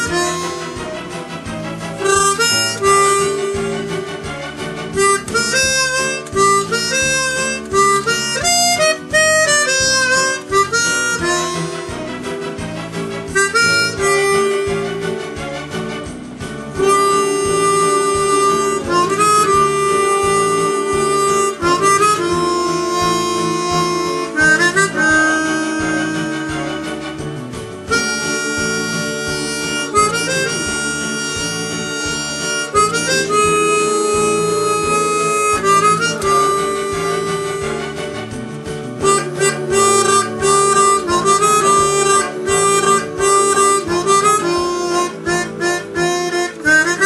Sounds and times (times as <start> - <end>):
Harmonica: 0.0 - 47.0.